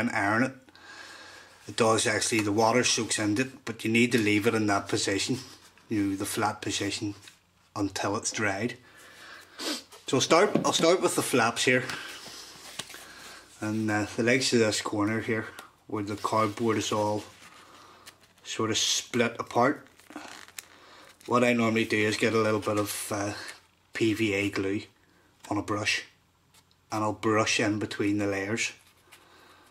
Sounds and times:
Speech: 0.0s - 0.6s, 1.7s - 8.8s, 10.1s - 12.0s, 13.6s - 17.3s, 18.4s - 19.9s, 21.3s - 26.2s, 26.9s - 28.8s
Inside, small room: 0.0s - 29.7s.

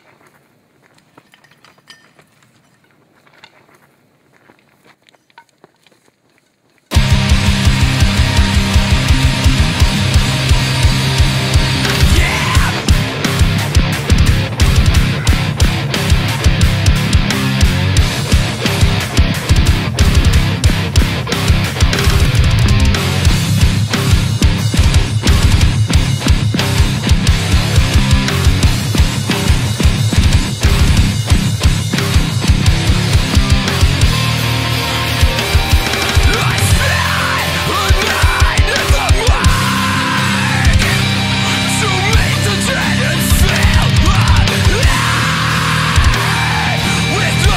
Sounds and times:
Music: 6.9s - 47.5s.

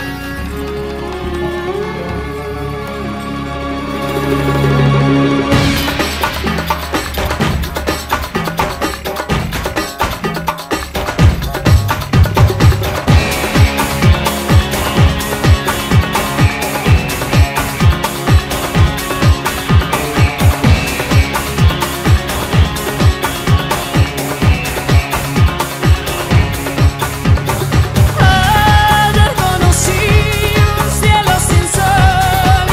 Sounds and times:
Music: 0.0s - 32.7s.

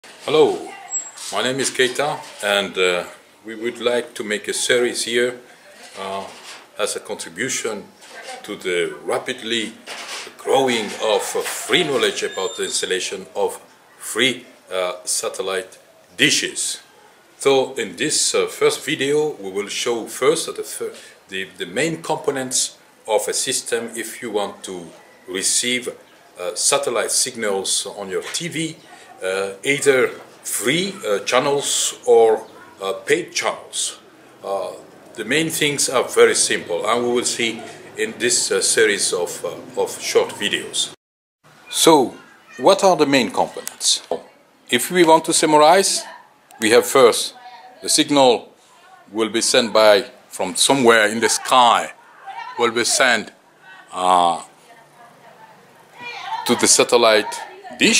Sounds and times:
Speech: 0.2s - 9.8s, 10.4s - 16.8s, 17.4s - 41.0s, 41.7s - 57.9s.

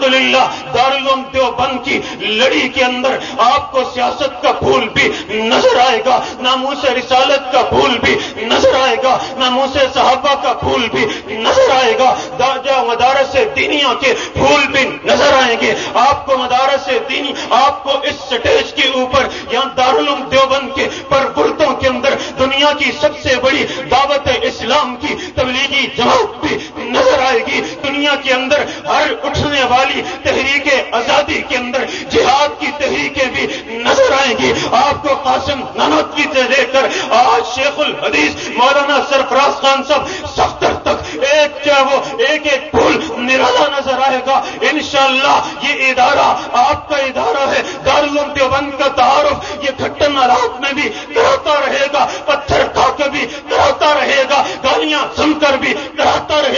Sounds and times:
Speech: 0.0s - 56.5s
Crying, sobbing: 5.3s - 6.3s, 8.4s - 9.4s, 10.9s - 12.4s, 26.0s - 27.8s, 32.9s - 35.0s.

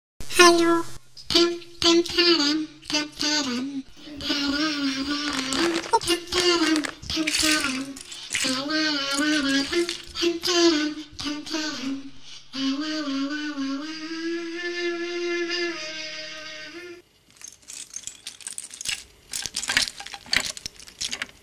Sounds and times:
Speech: 0.3s - 4.5s.

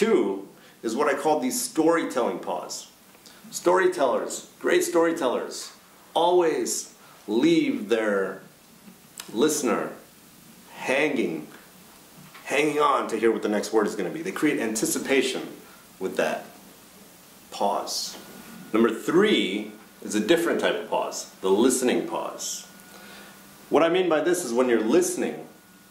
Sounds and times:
Speech: 0.0s - 8.5s, 9.2s - 10.1s, 10.7s - 11.7s, 12.4s - 16.6s, 17.5s - 22.8s, 23.7s - 25.6s.

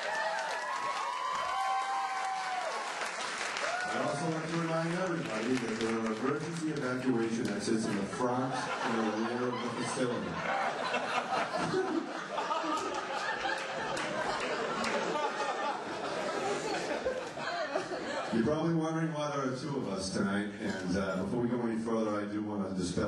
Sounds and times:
Male speech, man speaking: 4.0s - 10.4s, 18.3s - 23.0s
Narration, monologue: 4.0s - 10.9s, 18.3s - 23.0s.

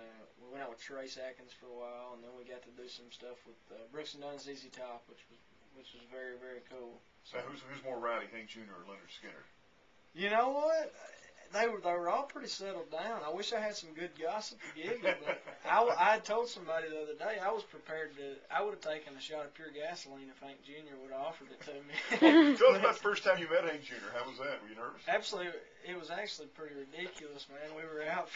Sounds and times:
Speech: 0.0s - 9.5s, 10.2s - 28.3s.

